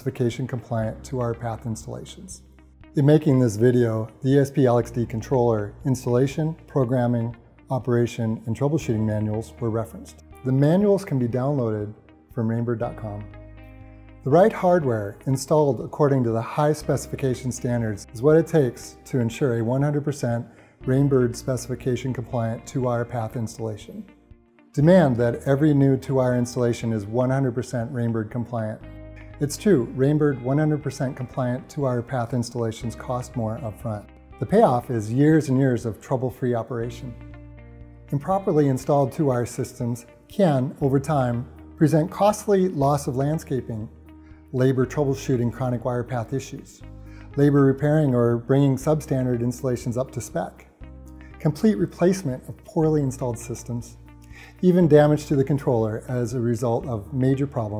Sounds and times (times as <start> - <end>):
Speech: 0.0 - 2.4, 3.0 - 13.4, 14.2 - 24.1, 24.8 - 37.2, 38.1 - 43.9, 44.5 - 46.8, 47.4 - 50.7, 51.4 - 54.0, 54.6 - 57.7
Music: 0.0 - 57.7.